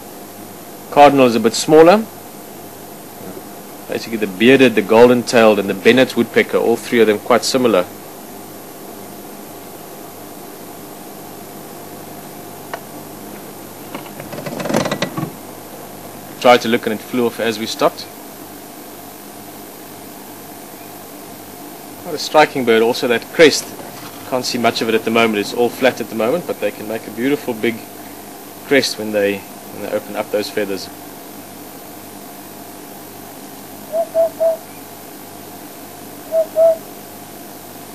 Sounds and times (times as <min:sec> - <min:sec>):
Speech: 0:00.9 - 0:02.2, 0:03.2 - 0:07.9, 0:16.4 - 0:18.2, 0:22.0 - 0:27.9, 0:28.6 - 0:31.0.